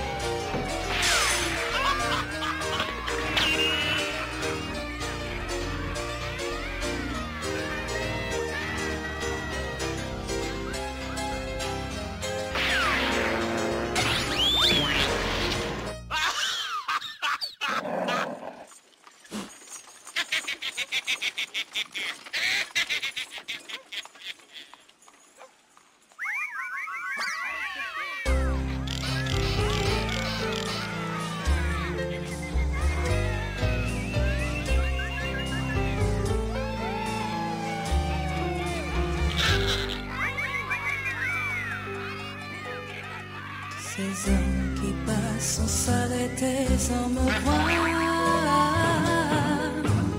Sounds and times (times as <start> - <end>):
Music: 0.0 - 16.2, 28.3 - 50.1.